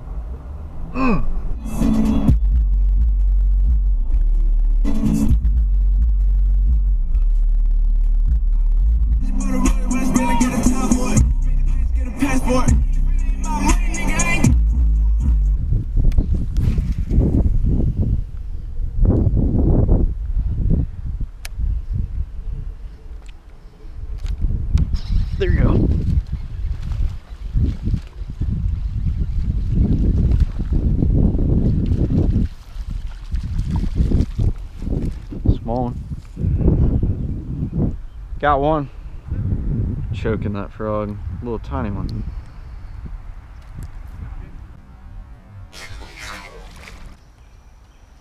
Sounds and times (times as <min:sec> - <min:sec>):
Outside, rural or natural: 0:00.0 - 0:48.2
Speech: 0:35.5 - 0:36.0, 0:38.4 - 0:38.9, 0:40.1 - 0:42.2.